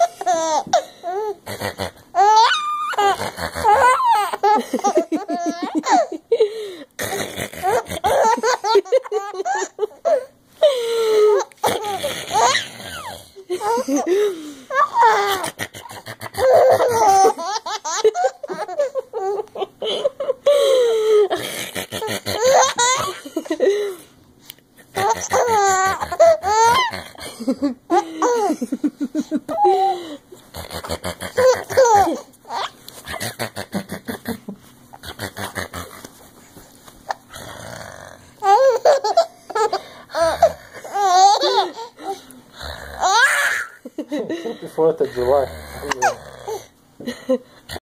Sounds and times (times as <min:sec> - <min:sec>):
Inside, small room: 0:00.0 - 0:47.8
Belly laugh: 0:04.4 - 0:06.4, 0:07.8 - 0:10.3, 0:13.5 - 0:21.4, 0:22.0 - 0:24.0, 0:26.4 - 0:29.9, 0:43.6 - 0:44.7
Speech: 0:44.5 - 0:46.2.